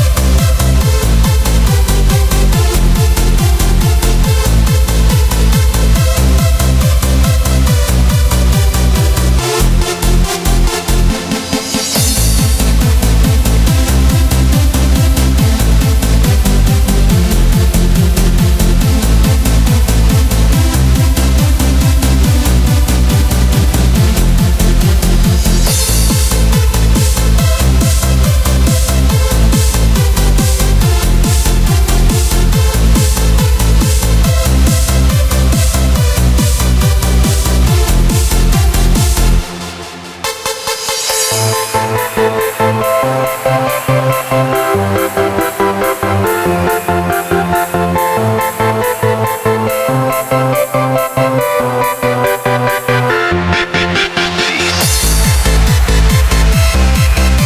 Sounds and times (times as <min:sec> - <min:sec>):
Techno: 0:00.0 - 0:57.4.